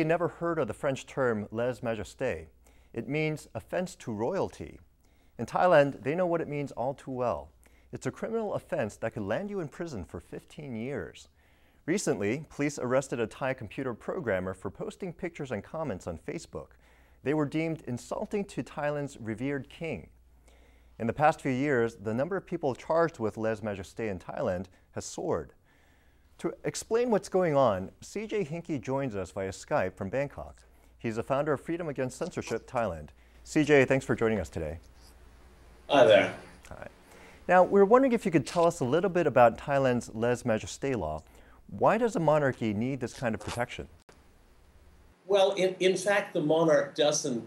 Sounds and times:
Male speech, man speaking: 0:00.0 - 0:04.8, 0:05.4 - 0:11.3, 0:11.9 - 0:20.1, 0:21.0 - 0:25.6, 0:26.4 - 0:34.8, 0:35.9 - 0:36.9, 0:37.5 - 0:44.0, 0:45.3 - 0:47.4.

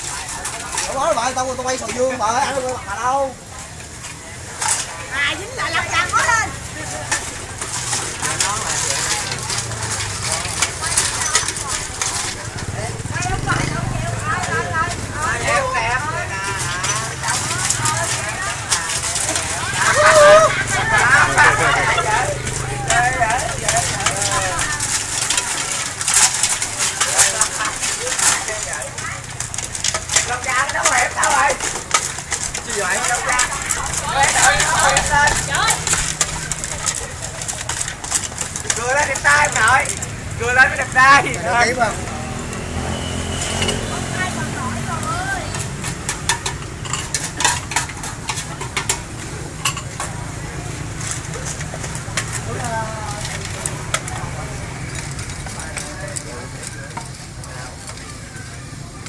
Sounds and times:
Stir: 0:03.6 - 0:41.7, 0:45.5 - 0:59.0.

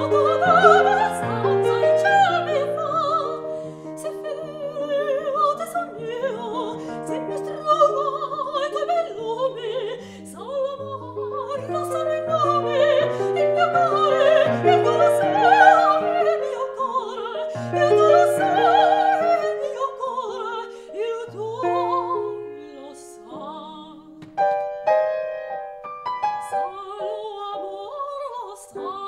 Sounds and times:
Singing: 0:00.0 - 0:24.1
Opera: 0:00.0 - 0:29.0
Piano: 0:00.0 - 0:29.0.

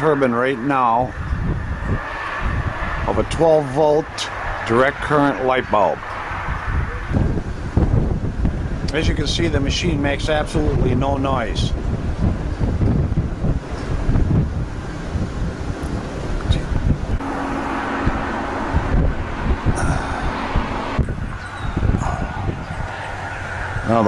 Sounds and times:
Speech: 0:00.0 - 0:01.1, 0:03.1 - 0:06.0, 0:08.9 - 0:11.8
Wind: 0:00.0 - 0:24.0.

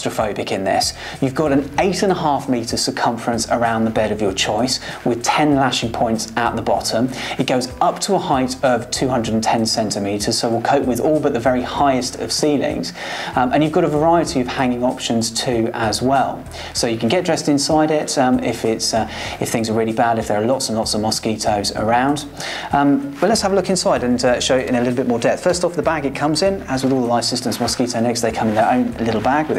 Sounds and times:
Speech: 0:00.0 - 0:29.5.

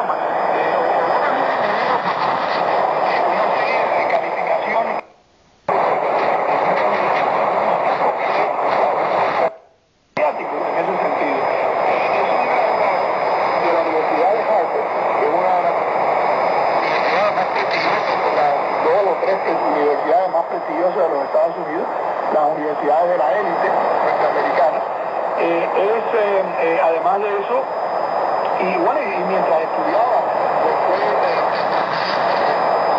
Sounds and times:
Radio: 0:00.0 - 0:32.9
Speech: 0:10.2 - 0:12.6, 0:13.5 - 0:15.9, 0:16.9 - 0:27.7, 0:28.5 - 0:31.7.

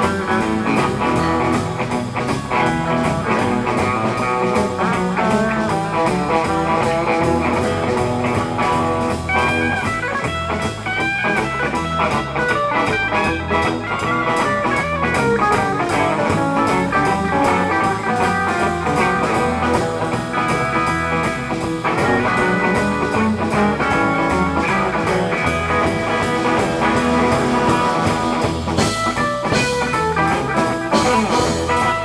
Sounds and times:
Guitar: 0:00.0 - 0:32.0.

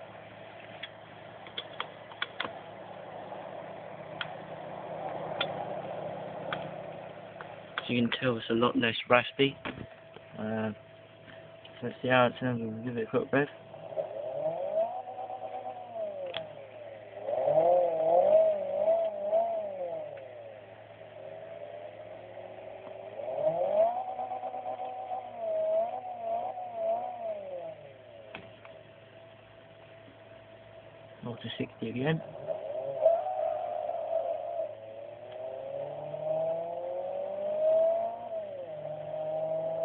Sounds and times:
Car: 0:00.0 - 0:33.2, 0:33.8 - 0:39.8
Inside, small room: 0:00.0 - 0:39.8
Speech: 0:07.8 - 0:09.6, 0:10.4 - 0:10.8, 0:11.8 - 0:13.6, 0:31.2 - 0:32.2.

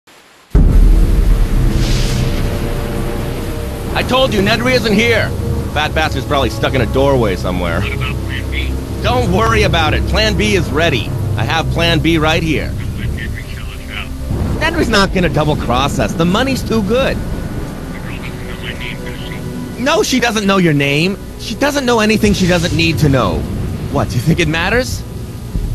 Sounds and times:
Speech: 0:03.9 - 0:17.2, 0:17.9 - 0:25.0.

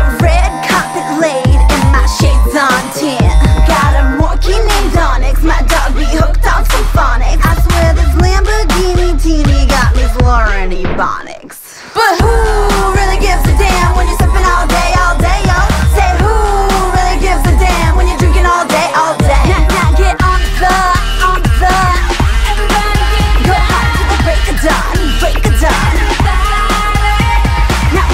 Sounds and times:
Exciting music: 0:00.0 - 0:11.0, 0:12.1 - 0:28.1.

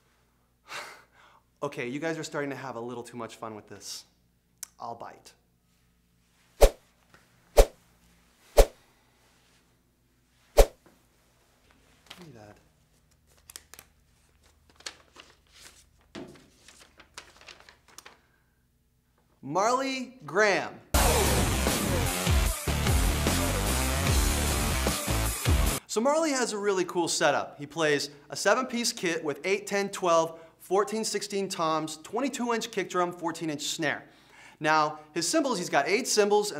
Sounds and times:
Speech: 0:01.6 - 0:05.4, 0:12.2 - 0:12.7, 0:19.4 - 0:21.3, 0:25.9 - 0:36.5.

